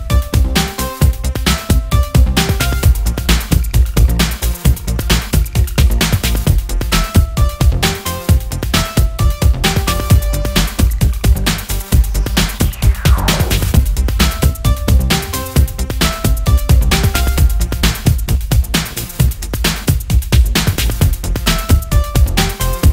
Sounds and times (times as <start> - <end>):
Music: 0.0 - 22.9.